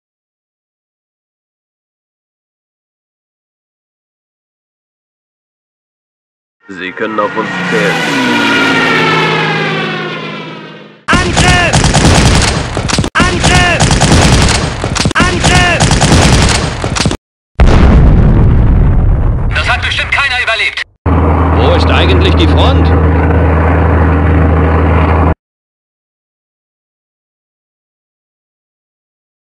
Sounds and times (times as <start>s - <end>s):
Speech: 6.7s - 8.0s, 11.1s - 11.8s, 13.2s - 13.8s, 15.2s - 15.8s, 19.5s - 20.9s, 21.6s - 23.0s.